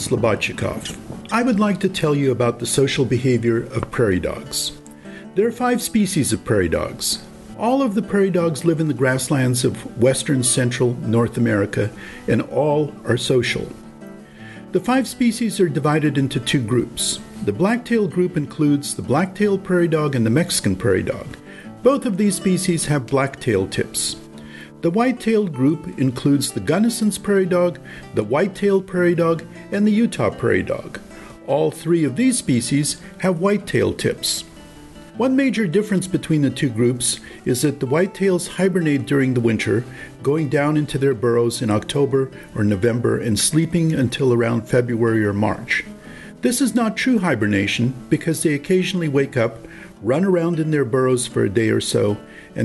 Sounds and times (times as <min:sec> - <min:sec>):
Music: 0:00.0 - 0:52.6
Narration, monologue: 0:00.0 - 0:52.6.